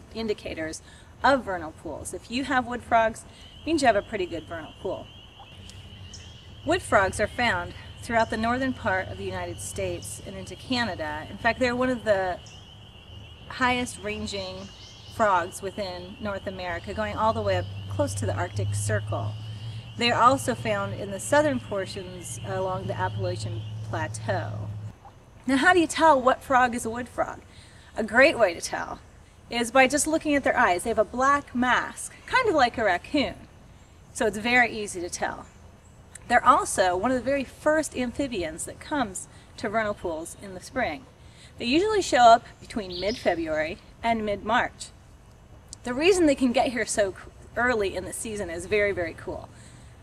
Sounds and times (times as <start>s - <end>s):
Frog: 5.1s - 6.7s.